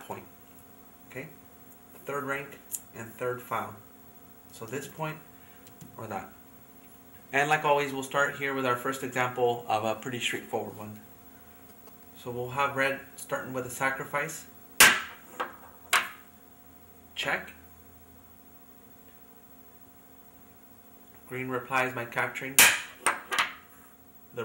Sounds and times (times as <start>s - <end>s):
Speech: 0.0s - 0.3s, 1.1s - 1.4s, 2.0s - 3.8s, 4.5s - 5.2s, 6.0s - 6.4s, 7.3s - 11.0s, 12.2s - 14.5s, 17.2s - 17.6s, 21.3s - 22.6s.